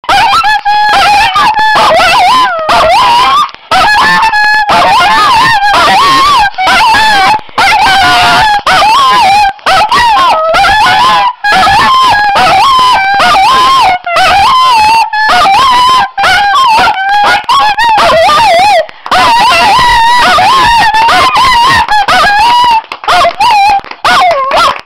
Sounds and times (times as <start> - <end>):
Dog: 0.0 - 24.8.